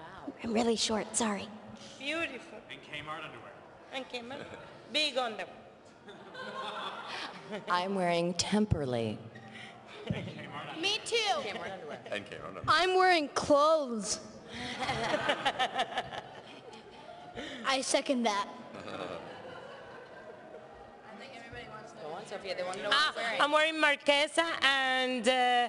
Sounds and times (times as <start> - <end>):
Female speech, woman speaking: 0.0 - 2.6, 3.9 - 5.6, 7.7 - 9.2, 10.7 - 12.0, 12.7 - 14.3, 21.1 - 25.6
Male speech, man speaking: 2.2 - 3.6, 11.4 - 12.7
Child speech, kid speaking: 12.7 - 14.2, 17.6 - 18.6.